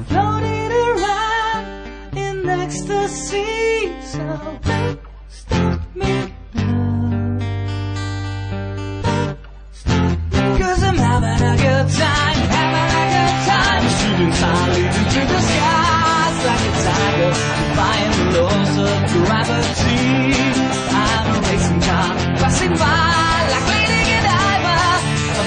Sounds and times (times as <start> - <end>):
Female singing: 0.0 - 7.4, 10.5 - 25.4
Music: 0.0 - 25.4.